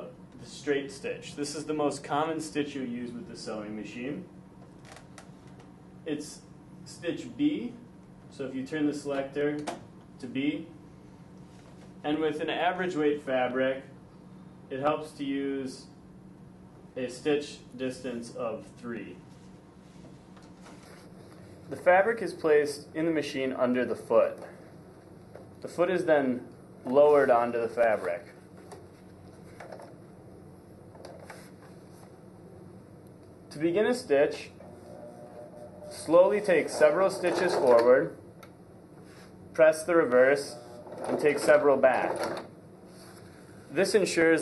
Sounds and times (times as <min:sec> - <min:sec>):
Speech: 0:00.0 - 0:04.3, 0:06.1 - 0:10.8, 0:12.0 - 0:14.0, 0:14.7 - 0:16.0, 0:17.0 - 0:19.2, 0:21.7 - 0:24.6, 0:25.6 - 0:28.4, 0:33.5 - 0:34.6, 0:35.9 - 0:38.2, 0:39.6 - 0:42.3, 0:43.7 - 0:44.4.